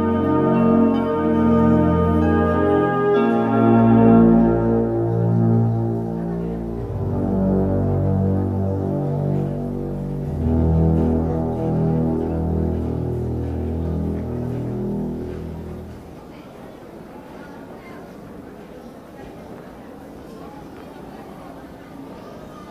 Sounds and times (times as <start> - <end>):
Music: 0.0 - 16.1
Speech: 0.9 - 22.7.